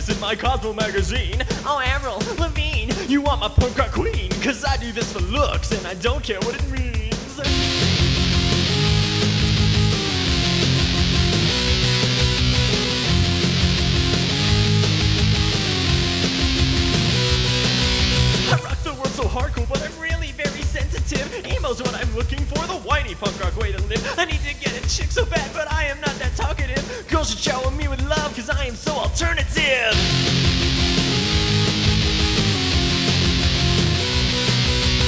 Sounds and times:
Punk rock: 0.0 - 35.0.

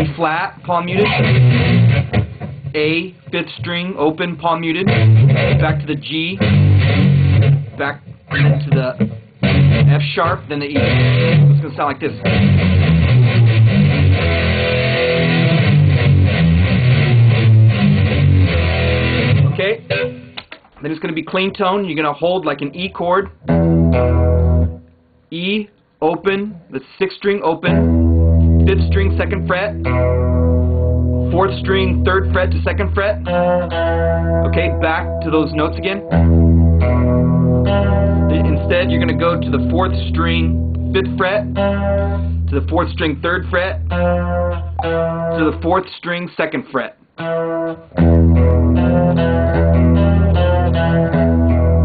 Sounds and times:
Speech: 0.0 - 1.3, 2.7 - 5.0, 5.6 - 6.4, 7.8 - 9.0, 9.9 - 10.9, 11.6 - 12.3, 19.5 - 19.9, 20.8 - 23.4, 25.3 - 27.9, 28.6 - 29.8, 31.3 - 33.3, 34.4 - 36.1, 38.3 - 41.6, 42.5 - 43.8, 45.4 - 47.0
Electric guitar: 0.9 - 2.8, 4.7 - 20.8, 22.7 - 25.0, 27.7 - 45.6, 47.2 - 51.8.

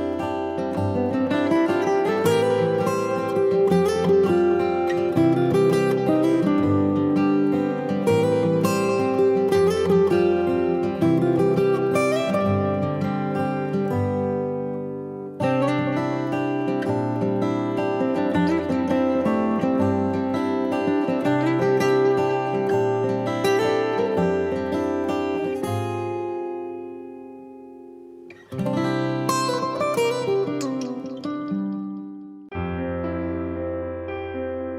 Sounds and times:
Music: 0.0 - 34.7.

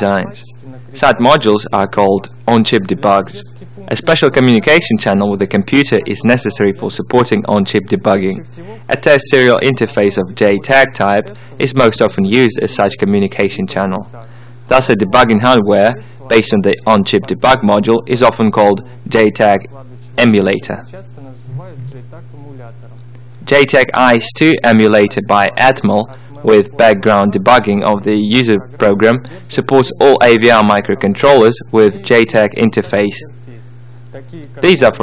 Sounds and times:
Speech: 0.0 - 35.0.

